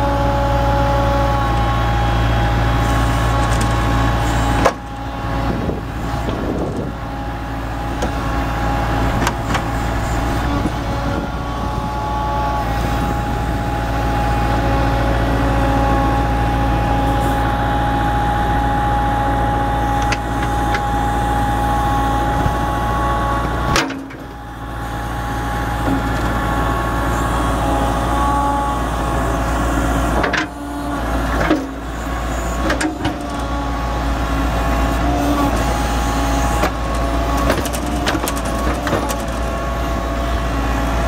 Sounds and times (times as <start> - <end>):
Vehicle: 0.0 - 41.0.